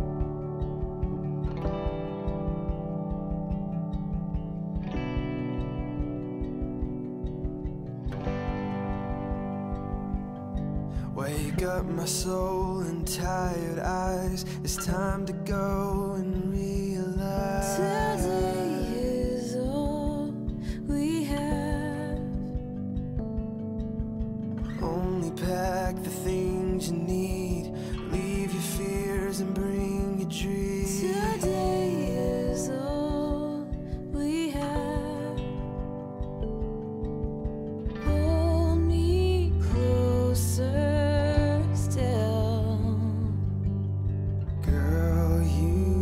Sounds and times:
Tender music: 0.0s - 46.0s.

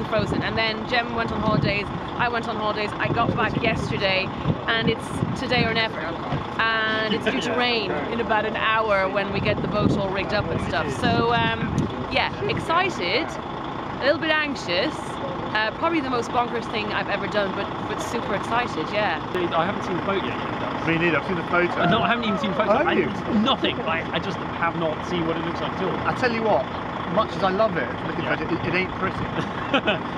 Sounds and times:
Speech: 0.0s - 13.4s, 14.0s - 29.5s
Vehicle: 0.0s - 30.1s.

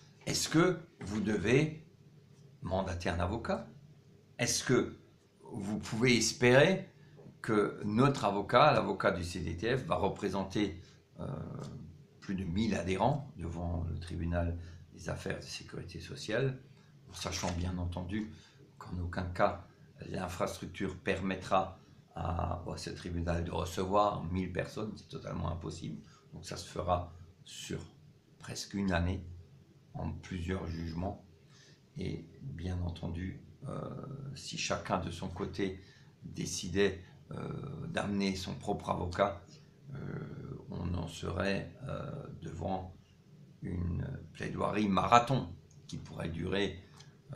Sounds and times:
Speech: 0.2s - 1.9s, 2.6s - 3.8s, 4.4s - 31.3s, 32.0s - 43.0s, 43.6s - 47.3s.

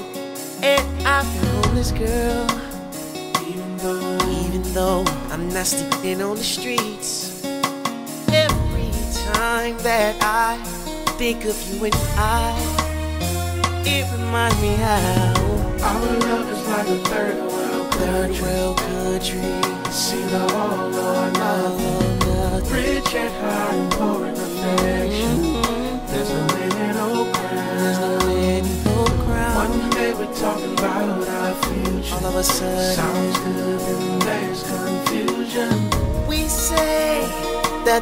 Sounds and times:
Country: 0.0s - 38.0s.

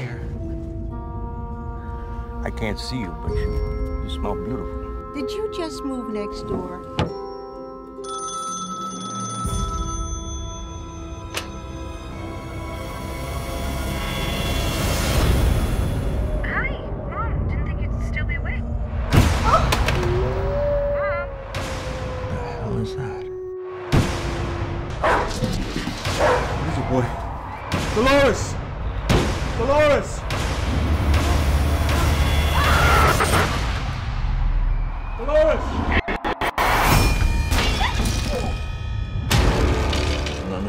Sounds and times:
Music: 0.0s - 40.6s
Outside, urban or manmade: 0.0s - 40.6s.

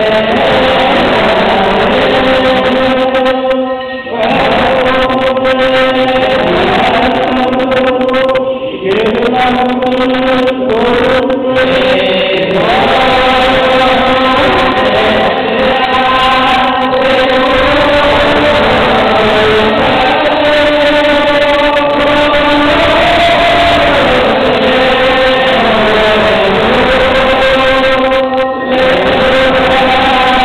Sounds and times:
Mantra: 0.0s - 30.4s.

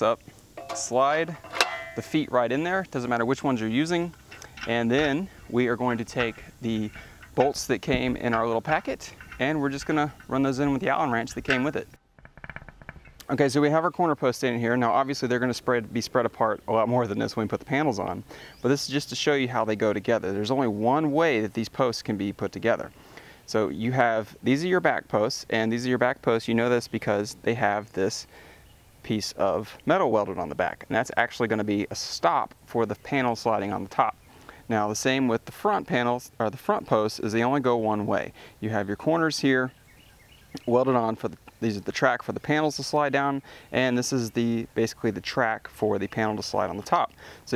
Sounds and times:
Speech: 0.0s - 1.4s, 2.0s - 11.9s, 13.2s - 22.9s, 23.5s - 28.3s, 29.0s - 39.7s, 40.6s - 47.5s.

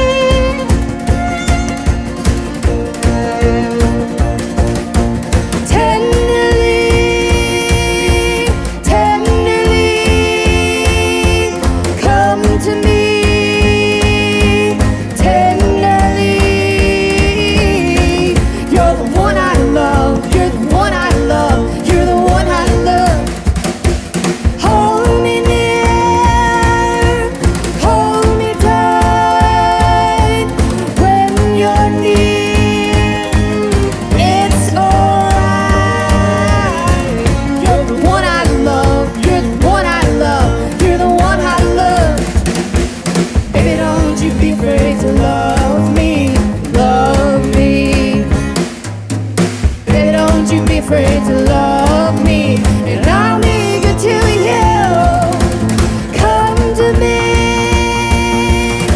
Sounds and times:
Musical instrument: 0.0s - 58.9s.

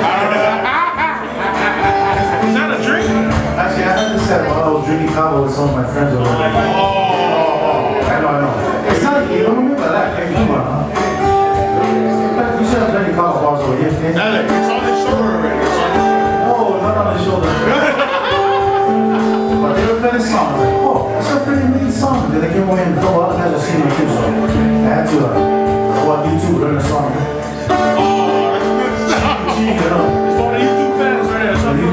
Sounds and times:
Music: 0.0s - 31.9s
Speech: 2.5s - 10.9s, 12.4s - 17.7s, 19.6s - 25.4s, 28.0s - 31.9s.

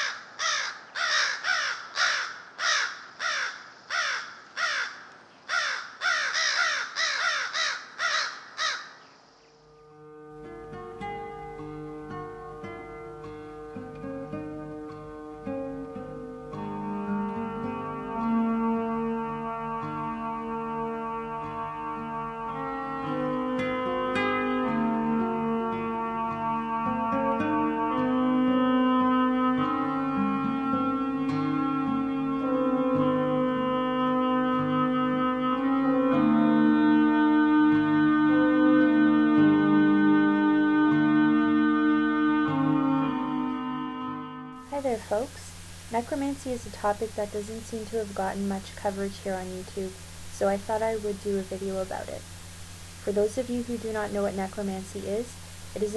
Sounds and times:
Caw: 0.0s - 9.1s
Music: 9.6s - 55.9s.

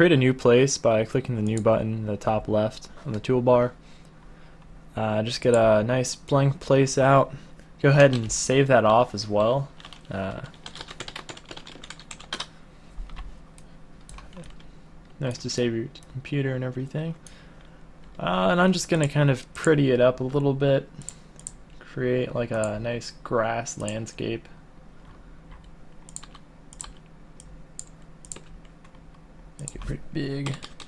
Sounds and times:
Computer keyboard: 9.8s - 12.5s, 25.6s - 27.0s, 27.8s - 29.0s, 29.6s - 30.8s.

